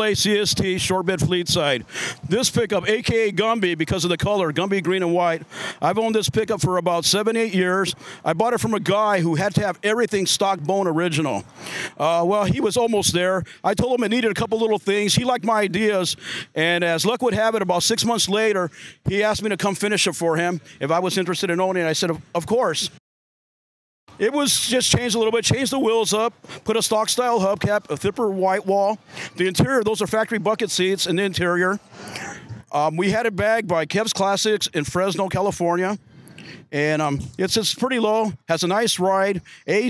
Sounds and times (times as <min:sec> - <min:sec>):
Speech: 0:00.0 - 0:11.4, 0:12.0 - 0:23.0, 0:24.2 - 0:31.8, 0:32.6 - 0:36.0, 0:36.7 - 0:39.9.